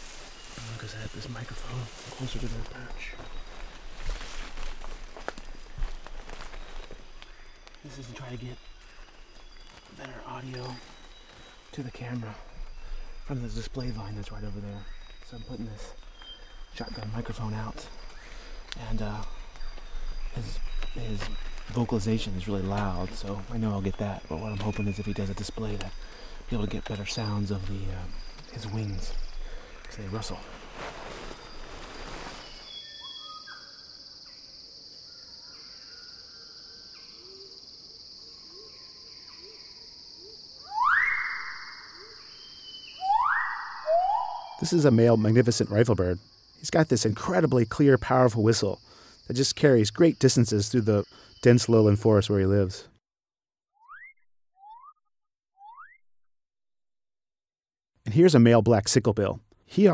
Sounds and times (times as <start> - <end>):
Speech: 0.6 - 3.2, 7.8 - 8.6, 10.0 - 10.8, 11.7 - 12.5, 13.3 - 16.0, 16.8 - 17.9, 18.8 - 19.3, 20.4 - 29.2, 29.9 - 30.4, 44.6 - 52.9, 58.1 - 59.9.